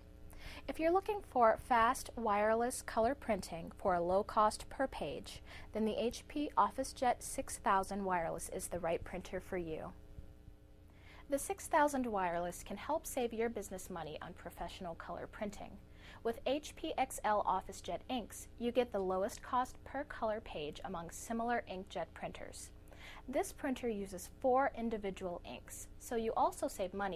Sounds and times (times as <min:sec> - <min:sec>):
Speech: 0:00.7 - 0:10.0, 0:11.3 - 0:27.1.